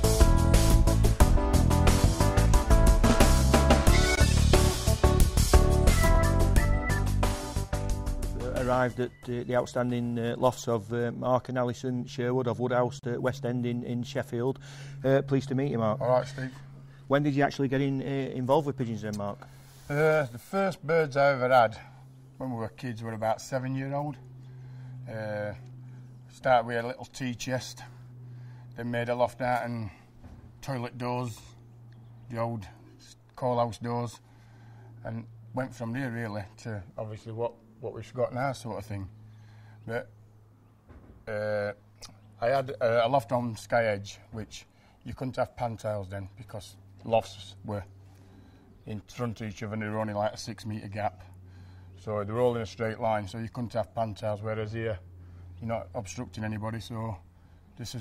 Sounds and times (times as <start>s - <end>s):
Speech: 8.4s - 24.2s, 25.1s - 25.6s, 26.3s - 27.9s, 28.8s - 30.0s, 30.6s - 31.6s, 32.3s - 34.2s, 35.0s - 39.1s, 39.9s - 40.1s, 41.3s - 41.8s, 42.4s - 47.9s, 48.9s - 51.3s, 52.0s - 55.0s, 55.6s - 57.2s, 57.8s - 58.0s.